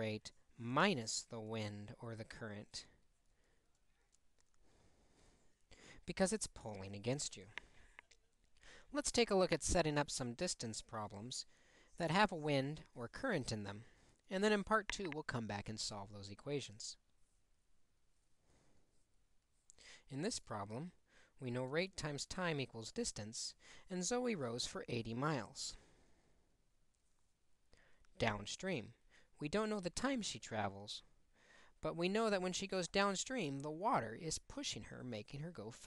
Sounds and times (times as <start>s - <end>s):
Speech: 0.0s - 3.0s, 6.0s - 17.0s, 20.1s - 25.8s, 28.2s - 31.1s, 31.8s - 35.8s.